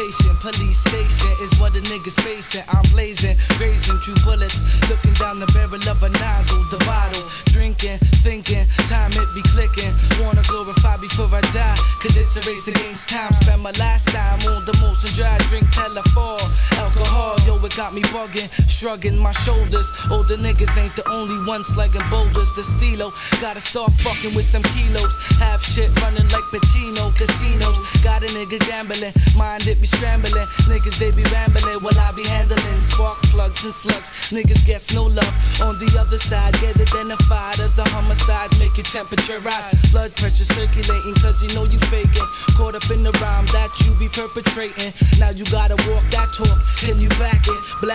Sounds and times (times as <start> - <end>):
Music: 0.0 - 47.9.